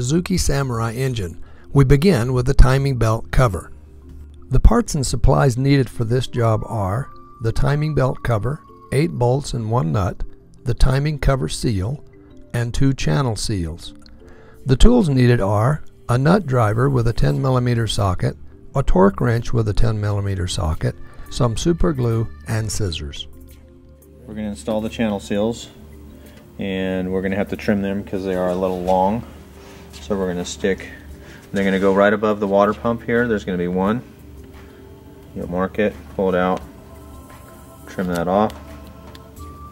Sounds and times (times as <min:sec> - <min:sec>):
Speech: 0:00.0 - 0:03.7, 0:04.5 - 0:12.0, 0:14.7 - 0:23.3, 0:24.3 - 0:25.8, 0:26.6 - 0:29.3, 0:30.0 - 0:34.1, 0:35.4 - 0:36.6, 0:37.9 - 0:38.6.